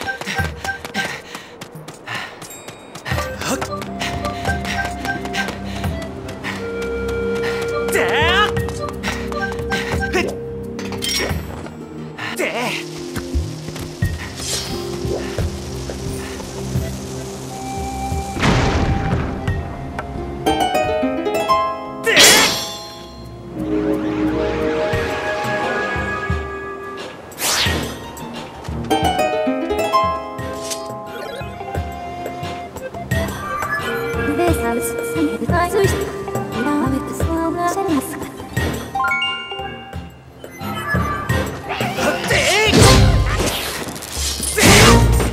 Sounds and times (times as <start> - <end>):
Music: 0.0 - 45.3.